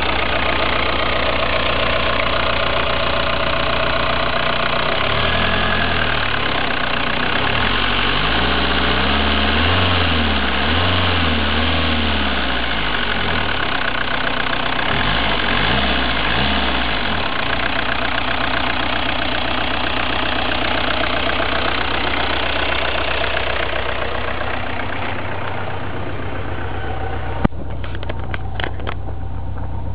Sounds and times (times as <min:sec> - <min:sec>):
Car: 0:00.0 - 0:29.9
Accelerating, revving, vroom: 0:05.0 - 0:06.2, 0:07.4 - 0:13.5, 0:14.9 - 0:17.2.